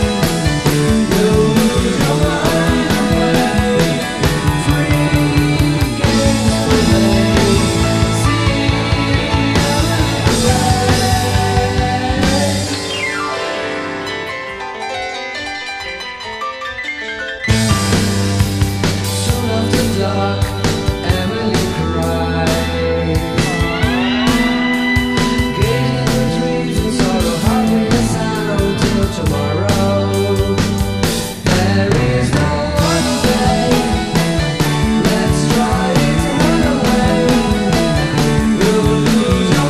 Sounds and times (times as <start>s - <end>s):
Singing: 0.0s - 12.9s, 19.2s - 39.6s
Guitar: 0.0s - 39.6s
Independent music: 0.0s - 39.6s
Psychedelic rock: 0.0s - 39.6s.